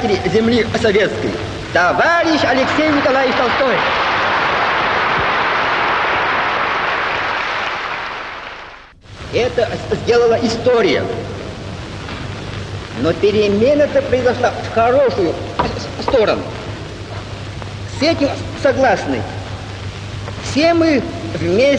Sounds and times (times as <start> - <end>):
Male speech, man speaking: 0.0 - 3.9, 9.3 - 11.2, 13.0 - 16.5, 17.9 - 19.4, 20.4 - 21.7
Narration, monologue: 0.0 - 3.9, 9.2 - 21.7.